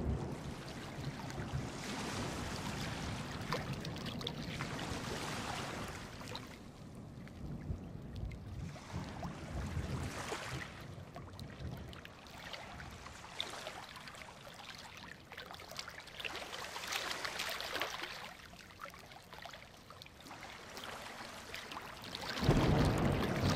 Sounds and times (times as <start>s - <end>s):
Waves, surf: 0.0s - 23.5s.